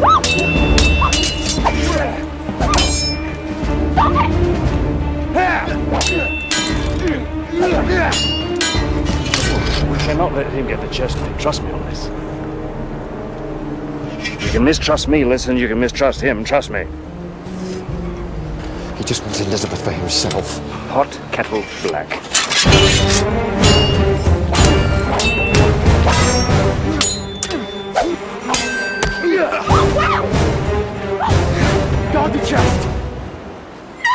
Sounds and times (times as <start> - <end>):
Music: 0.0 - 34.1.